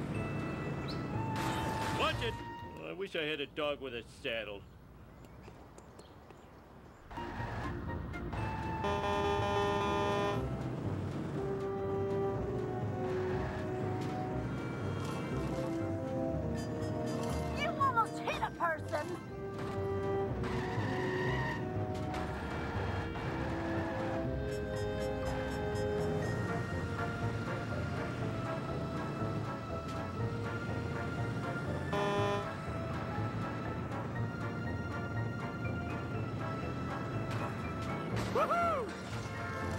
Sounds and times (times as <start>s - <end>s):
Music: 0.0s - 3.1s, 7.1s - 39.7s.